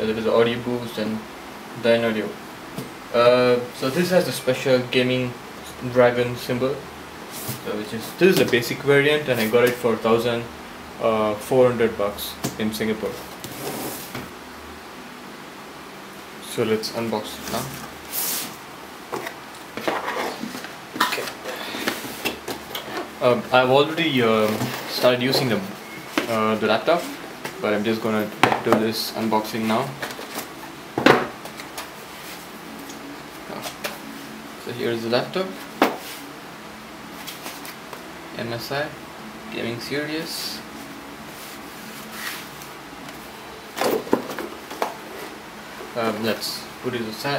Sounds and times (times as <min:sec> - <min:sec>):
Speech: 0:00.0 - 0:02.4, 0:03.1 - 0:06.9, 0:07.6 - 0:13.2, 0:16.4 - 0:17.8, 0:23.2 - 0:30.0, 0:34.6 - 0:35.6, 0:38.4 - 0:40.7, 0:46.0 - 0:47.3.